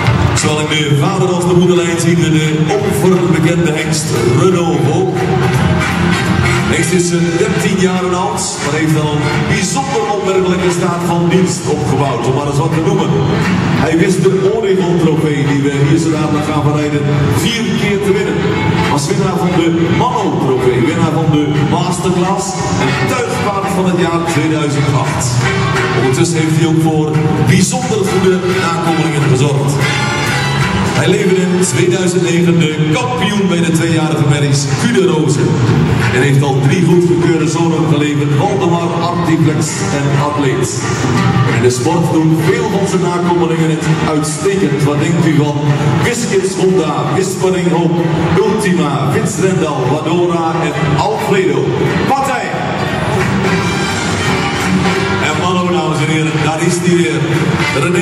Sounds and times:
Speech: 0.0 - 5.7, 6.5 - 29.9, 31.0 - 53.0, 55.2 - 58.0
Music: 0.0 - 58.0.

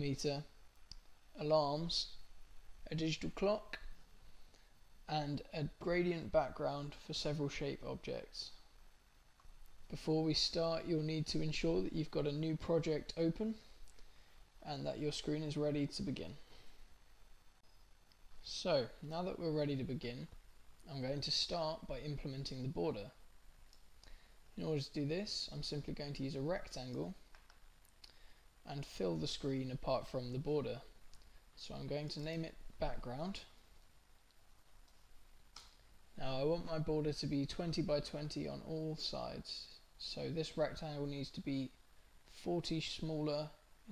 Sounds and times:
Speech: 0.0 - 0.5, 1.4 - 2.2, 2.9 - 3.9, 5.1 - 8.6, 9.9 - 13.7, 14.6 - 16.4, 18.4 - 23.2, 24.6 - 27.2, 28.6 - 30.9, 31.6 - 33.6, 36.2 - 43.9.

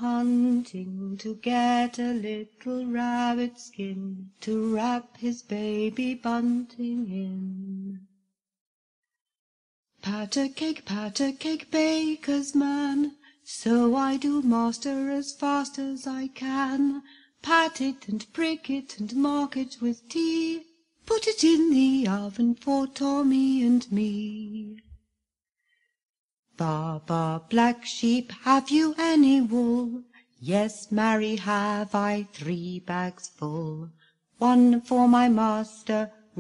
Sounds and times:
Vocal music: 0.0 - 8.0, 10.0 - 25.0, 26.6 - 36.4.

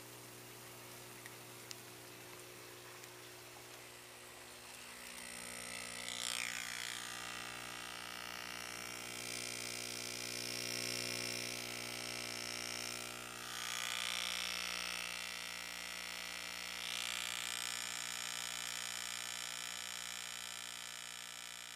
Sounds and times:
Inside, small room: 0.0 - 21.7.

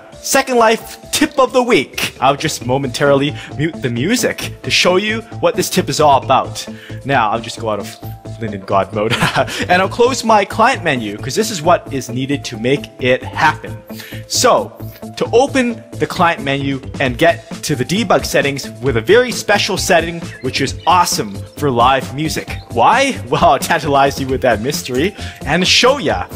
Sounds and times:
Music: 0.0 - 26.3
Speech: 0.2 - 9.1, 9.7 - 26.3.

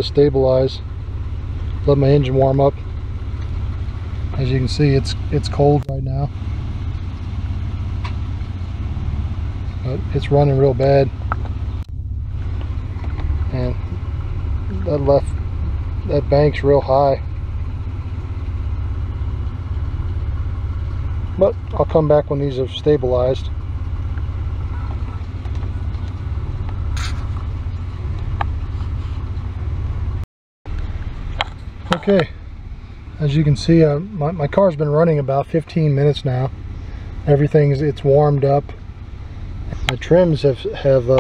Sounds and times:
Car: 0.0 - 41.2.

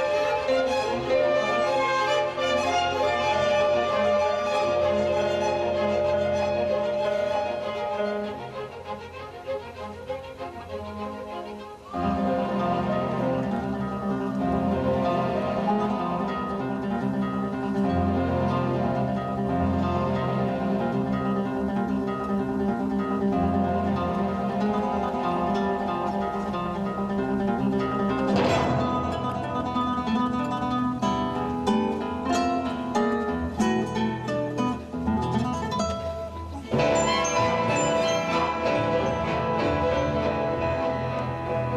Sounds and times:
Bowed string instrument: 0.0 - 41.7
Classical music: 0.0 - 41.7
Guitar: 0.0 - 41.7
Orchestra: 0.0 - 41.7.

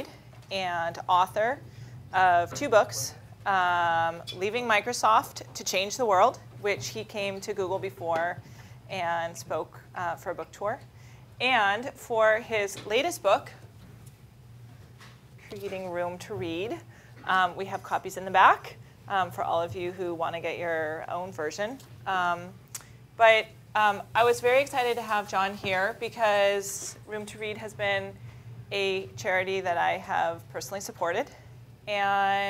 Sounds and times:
Speech: 0.0 - 1.6, 2.2 - 10.8, 11.4 - 13.6, 15.5 - 22.6, 23.2 - 32.5.

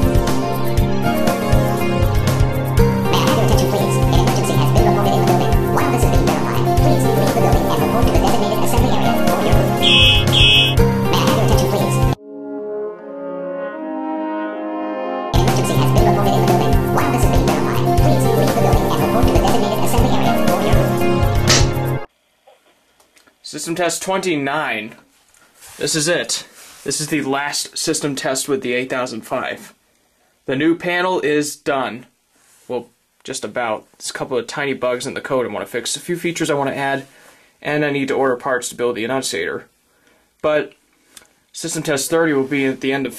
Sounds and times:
Music: 0.0 - 22.1
Speech: 3.1 - 9.8, 11.1 - 12.2, 15.4 - 21.0, 23.4 - 25.0, 25.8 - 29.8, 30.5 - 32.1, 32.7 - 39.7, 40.4 - 40.8, 41.6 - 43.1.

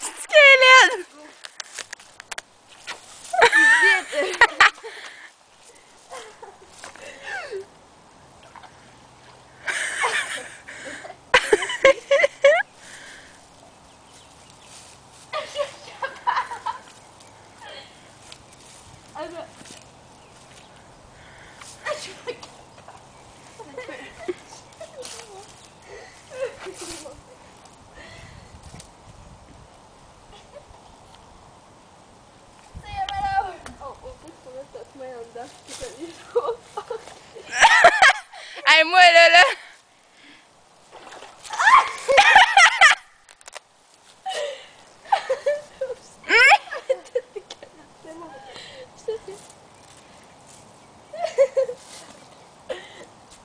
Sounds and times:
Outside, rural or natural: 0.0 - 53.4.

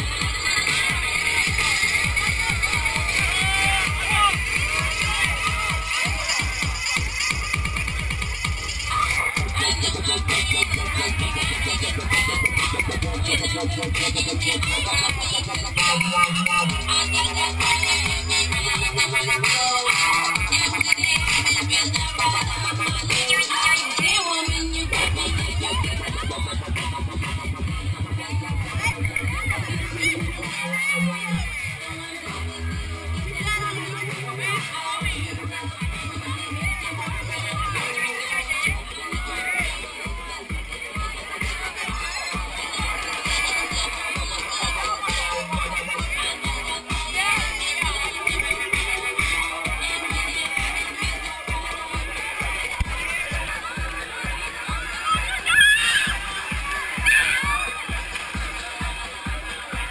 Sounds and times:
Music: 0.0 - 59.9
Speech: 0.0 - 59.9.

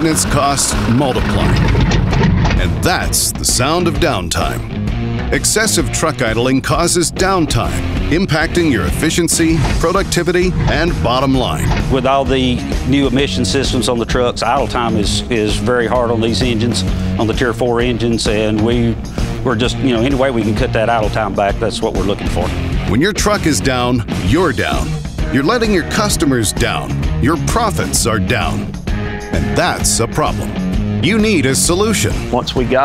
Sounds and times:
Speech: 0.0 - 1.7, 2.6 - 4.7, 5.3 - 28.7, 29.4 - 32.8
Music: 0.0 - 32.8.

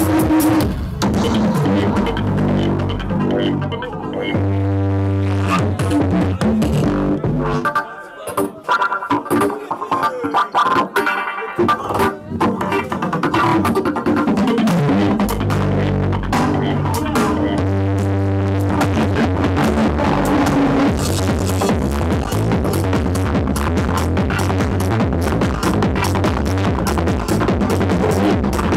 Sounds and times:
Music: 0.0 - 28.7.

